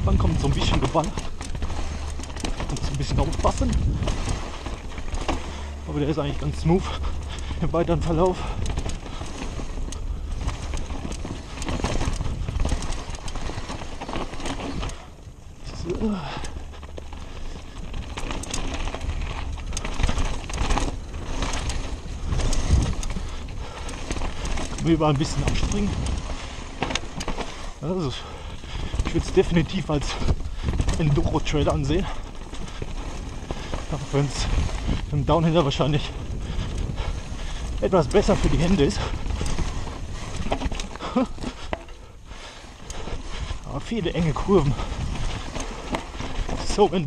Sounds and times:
Speech: 0.0 - 1.2, 2.7 - 3.8, 5.9 - 7.0, 7.6 - 8.4, 15.6 - 16.4, 24.8 - 26.0, 27.8 - 28.3, 29.1 - 30.3, 30.9 - 32.2, 33.9 - 34.5, 35.1 - 36.2, 37.8 - 39.1, 43.7 - 44.9, 46.6 - 47.0.

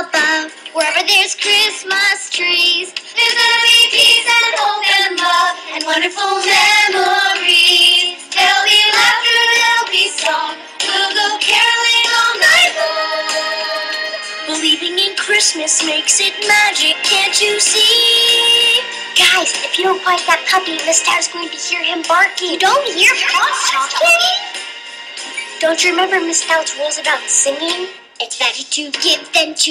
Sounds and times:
Exciting music: 3.2 - 27.6
Speech: 19.2 - 24.5, 25.6 - 29.7.

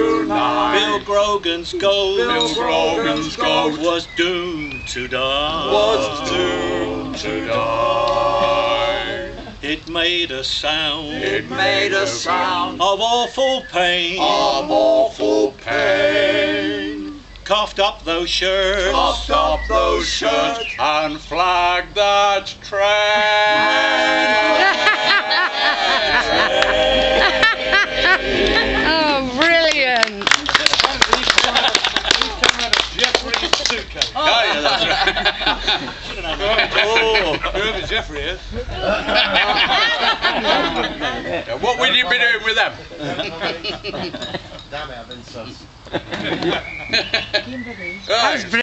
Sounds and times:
Male speech, man speaking: 32.5 - 34.9, 36.2 - 38.4, 41.3 - 43.8, 44.7 - 45.7, 48.1 - 48.6.

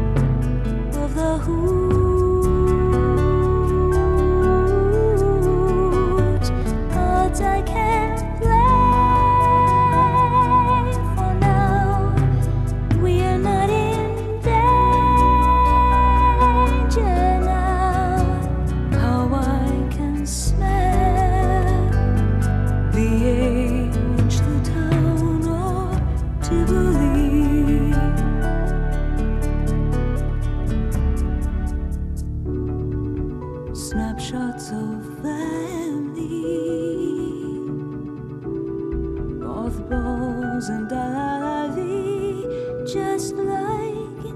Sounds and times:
Tender music: 0.0 - 44.3.

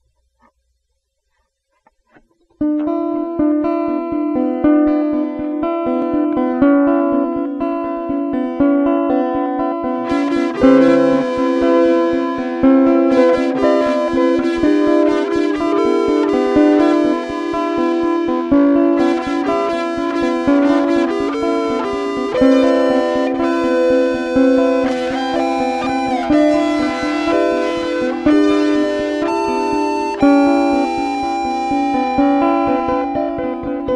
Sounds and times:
Music: 1.3 - 33.9.

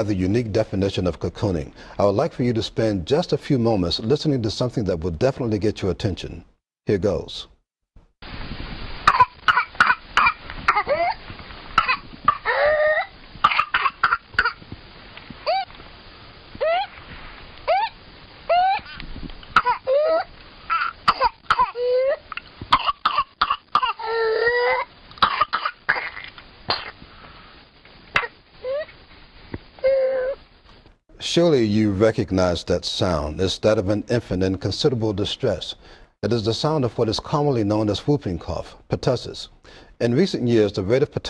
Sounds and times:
Cough: 9.1 - 11.1, 11.8 - 12.6, 13.4 - 14.6, 19.6 - 19.9, 20.7 - 21.9, 22.7 - 24.1, 24.8 - 27.0.

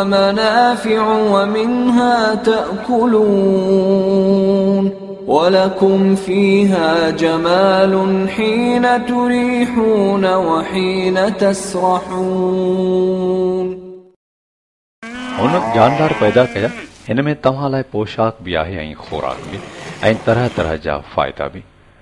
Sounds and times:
Moo: 15.0 - 17.0.

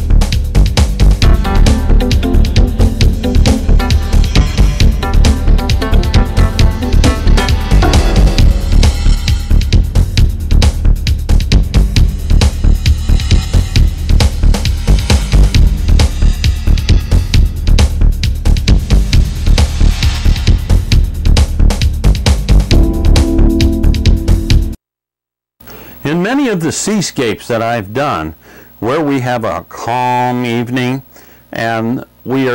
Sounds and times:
Music: 0.0 - 24.8
Speech: 26.0 - 32.5.

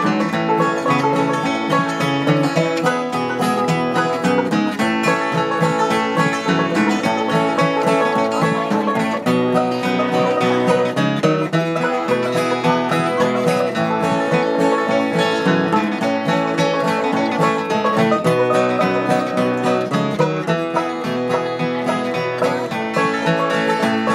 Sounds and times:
Acoustic guitar: 0.0 - 24.1
Strum: 0.0 - 24.1.

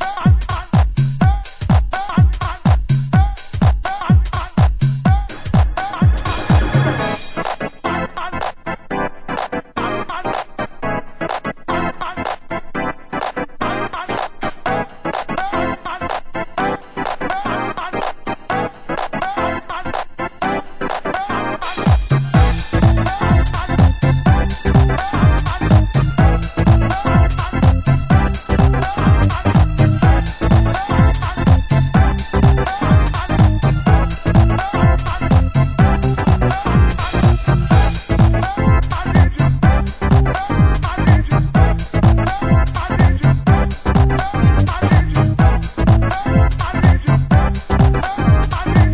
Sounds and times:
Music: 0.0 - 48.9.

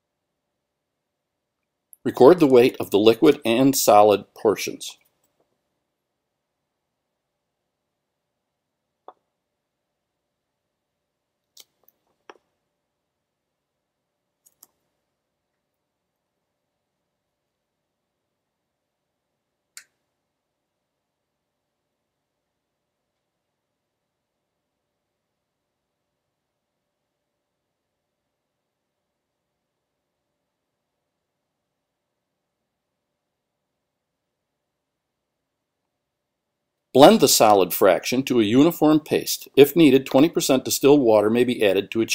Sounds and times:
Speech: 2.1 - 5.0, 37.0 - 42.1.

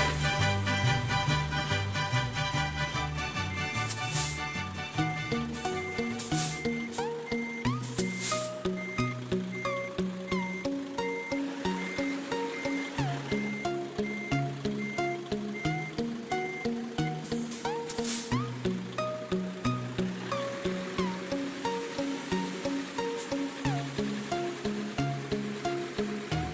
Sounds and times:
Music: 0.0 - 26.5
Reversing beeps: 3.3 - 18.5.

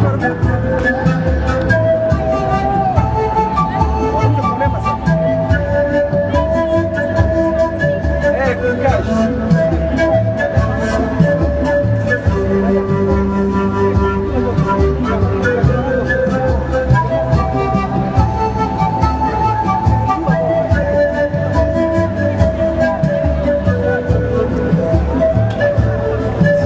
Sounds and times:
Music: 0.0 - 26.6.

